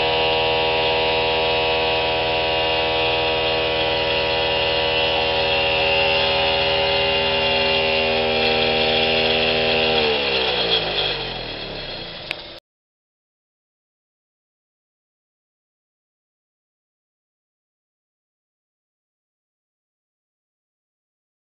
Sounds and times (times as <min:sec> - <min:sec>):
Drill: 0:00.0 - 0:12.6
Outside, rural or natural: 0:00.0 - 0:12.6.